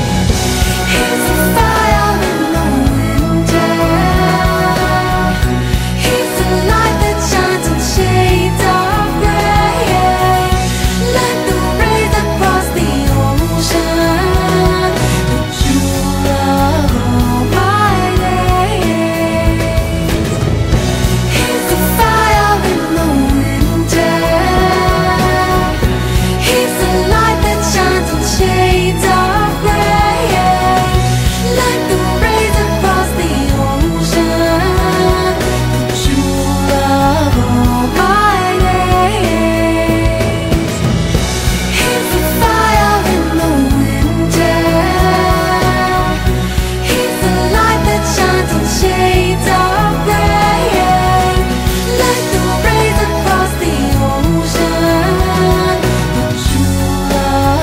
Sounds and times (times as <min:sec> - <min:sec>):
Music: 0:00.0 - 0:57.6.